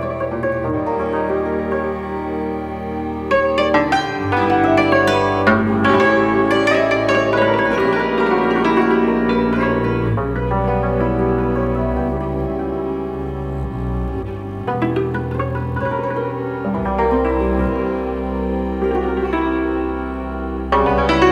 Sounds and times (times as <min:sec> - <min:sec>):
Music: 0:00.0 - 0:21.3.